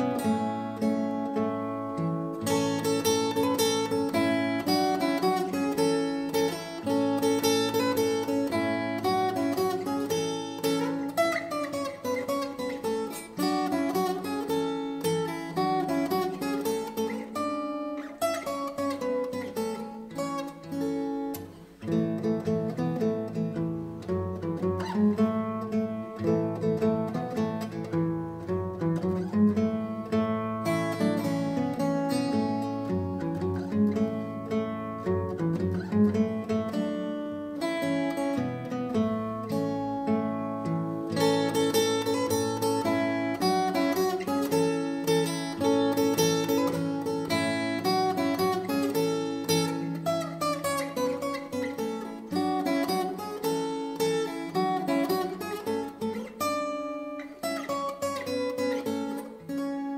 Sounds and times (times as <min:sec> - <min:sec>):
Guitar: 0:00.0 - 0:59.9.